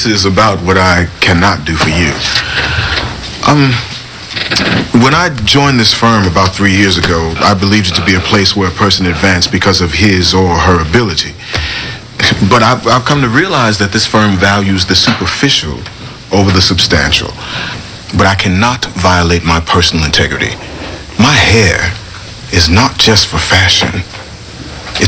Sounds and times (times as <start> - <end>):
Male speech, man speaking: 0.0 - 2.4, 3.4 - 4.0, 4.9 - 11.4, 12.2 - 17.4, 18.1 - 20.6, 21.2 - 24.1.